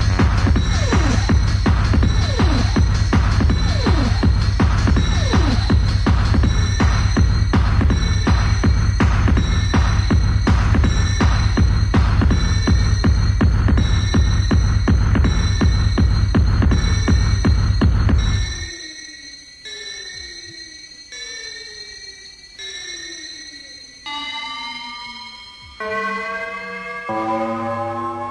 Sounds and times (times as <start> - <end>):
Techno: 0.0 - 28.3.